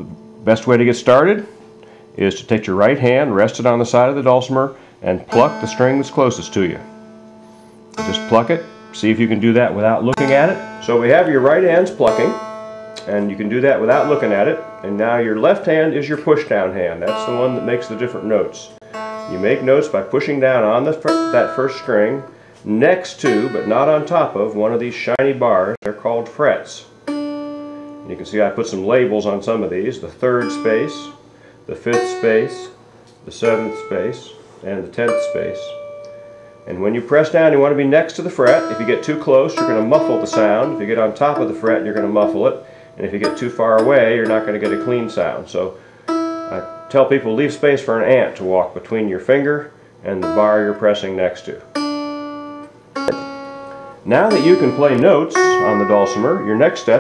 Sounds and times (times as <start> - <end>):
Speech: 0.0 - 1.5, 2.2 - 6.9, 8.0 - 12.4, 13.0 - 26.9, 28.1 - 35.8, 36.7 - 45.8, 46.5 - 51.7, 54.0 - 57.0
Plucked string instrument: 5.2 - 25.1, 27.0 - 31.2, 31.8 - 32.8, 33.4 - 48.4, 50.1 - 57.0.